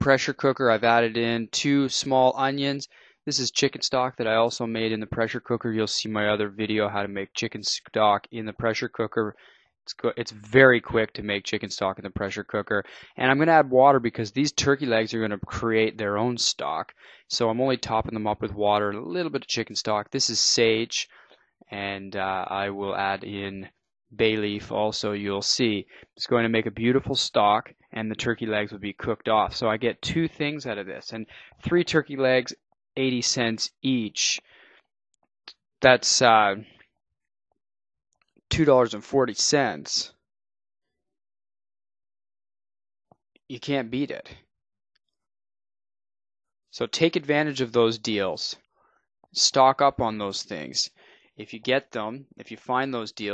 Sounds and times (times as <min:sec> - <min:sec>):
Speech: 0:00.0 - 0:34.4, 0:35.8 - 0:36.8, 0:38.5 - 0:40.1, 0:43.5 - 0:44.4, 0:46.8 - 0:48.6, 0:49.4 - 0:53.3.